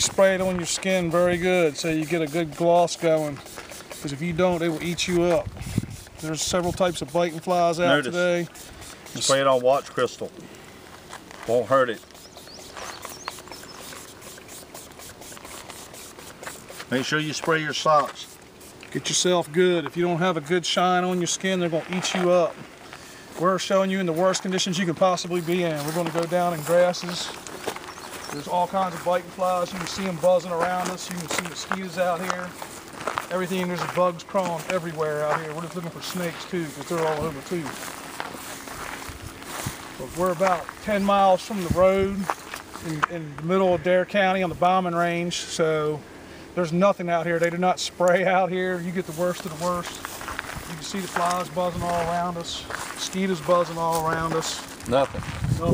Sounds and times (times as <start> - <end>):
Speech: 0.0 - 3.4, 4.0 - 5.5, 6.2 - 8.5, 9.1 - 10.4, 11.4 - 12.0, 16.9 - 18.3, 18.9 - 22.6, 23.4 - 27.4, 28.3 - 32.5, 33.3 - 37.8, 40.0 - 46.0, 46.6 - 50.0, 50.7 - 55.7.